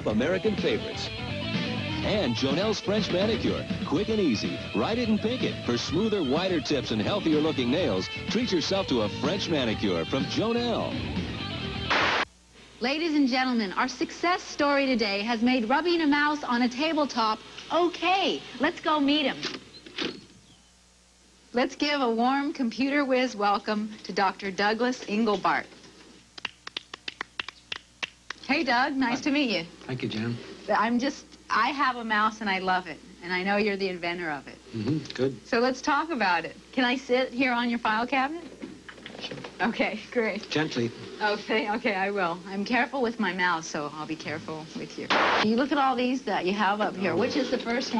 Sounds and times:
Music: 0.0 - 12.2
Speech: 2.0 - 10.9, 31.5 - 35.4.

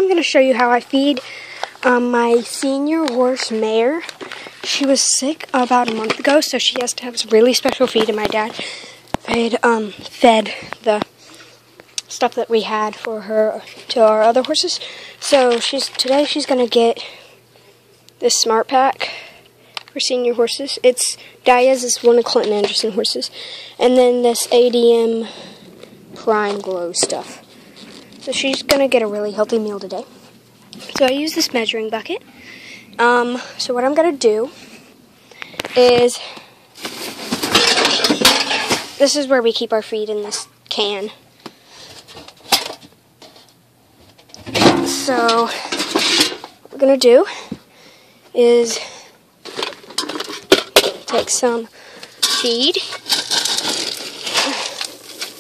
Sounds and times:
Speech: 0.0 - 8.6, 9.2 - 11.1, 12.0 - 17.2, 18.2 - 19.2, 19.9 - 25.4, 26.2 - 27.4, 28.2 - 30.1, 30.8 - 32.2, 33.0 - 34.6, 35.8 - 36.4, 39.0 - 41.2, 44.9 - 45.7, 46.7 - 47.5, 48.3 - 49.0, 51.1 - 51.7, 52.4 - 53.0.

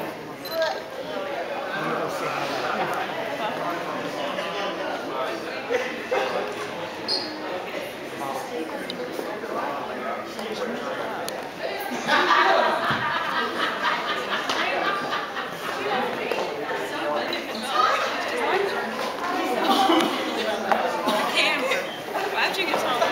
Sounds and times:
Speech: 0.0 - 23.1.

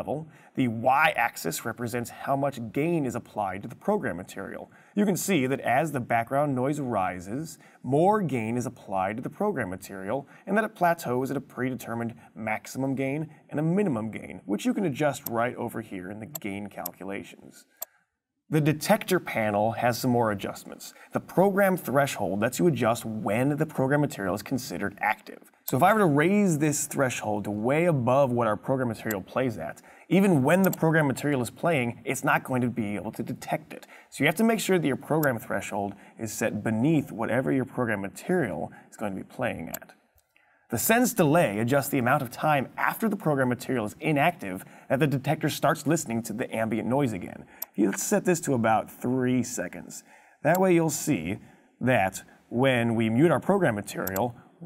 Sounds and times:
Speech: 0.0 - 17.7, 18.5 - 40.0, 40.7 - 54.6.

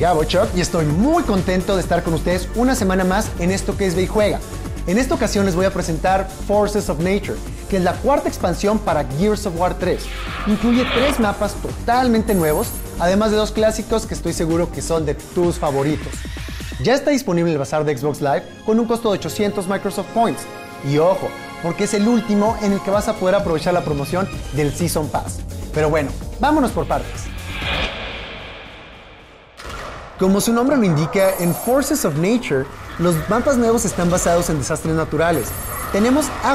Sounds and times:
Speech: 0.0 - 16.2, 16.8 - 27.3, 30.2 - 36.5
Music: 0.0 - 36.5.

